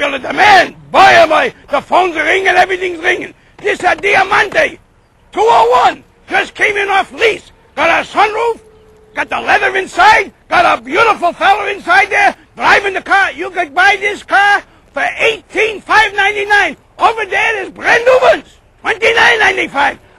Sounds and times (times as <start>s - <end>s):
Speech: 0.0s - 4.8s, 5.4s - 8.6s, 9.2s - 20.0s.